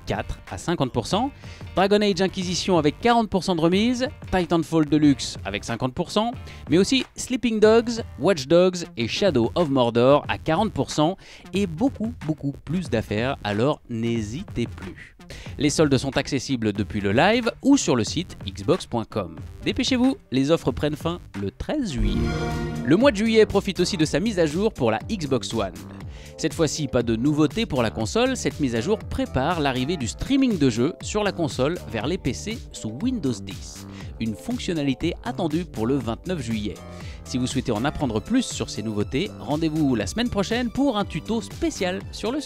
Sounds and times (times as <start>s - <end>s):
Speech: 0.0s - 22.3s, 22.9s - 25.8s, 26.4s - 42.4s
Music: 0.0s - 42.4s.